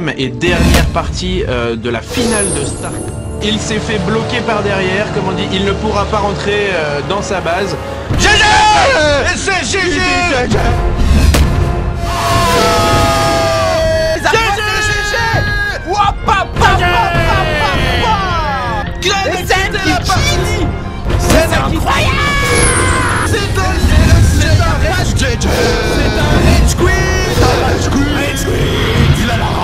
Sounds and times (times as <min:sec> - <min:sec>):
Music: 0:00.0 - 0:29.6
Speech: 0:13.8 - 0:22.4.